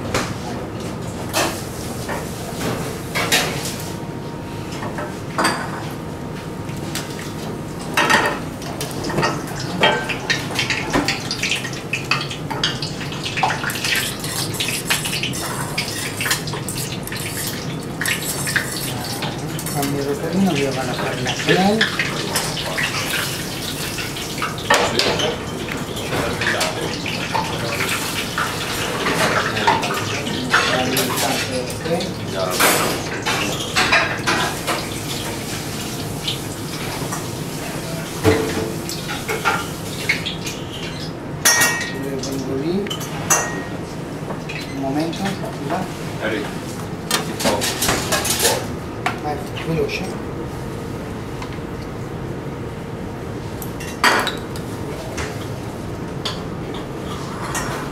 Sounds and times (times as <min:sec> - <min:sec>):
Water: 0:07.1 - 0:46.5.